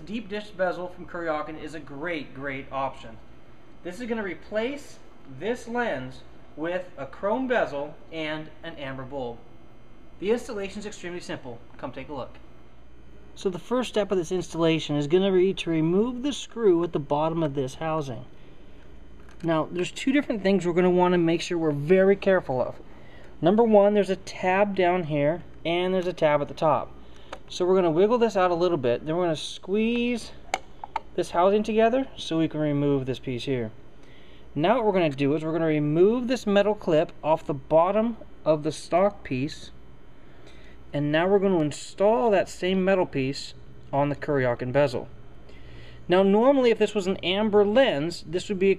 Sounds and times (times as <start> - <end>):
Speech: 0.0 - 9.5, 10.2 - 12.4, 13.4 - 18.3, 19.4 - 22.8, 23.4 - 30.4, 31.2 - 33.8, 34.6 - 39.8, 40.9 - 45.2, 46.1 - 48.7
Inside, small room: 0.0 - 48.7.